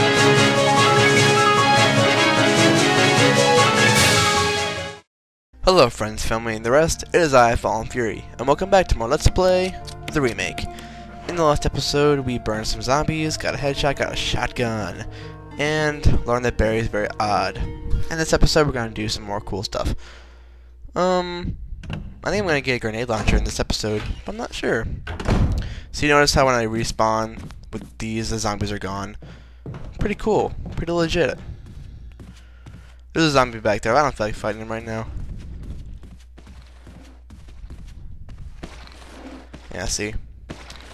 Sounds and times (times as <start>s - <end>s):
Speech: 5.6s - 20.0s, 20.9s - 21.5s, 22.2s - 25.0s, 25.9s - 29.2s, 30.0s - 31.5s, 33.2s - 35.1s, 39.7s - 40.2s.